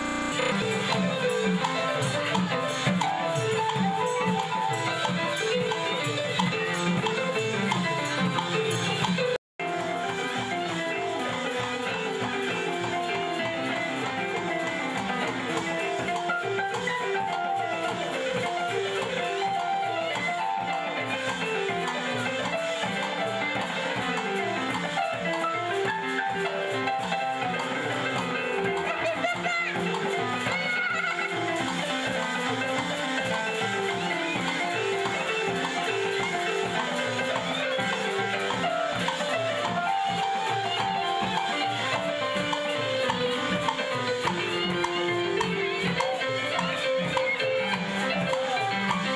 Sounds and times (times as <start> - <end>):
Music: 0.0 - 49.1
Speech: 28.7 - 31.5.